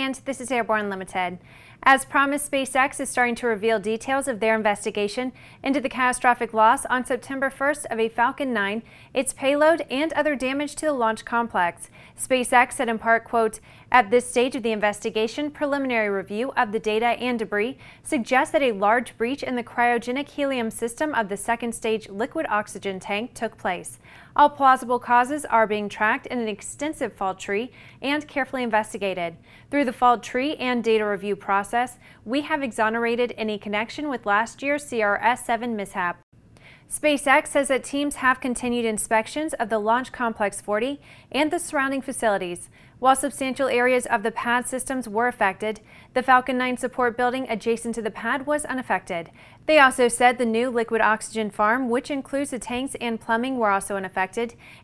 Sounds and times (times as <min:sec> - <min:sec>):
Speech: 0:00.0 - 0:36.2, 0:36.9 - 0:54.6.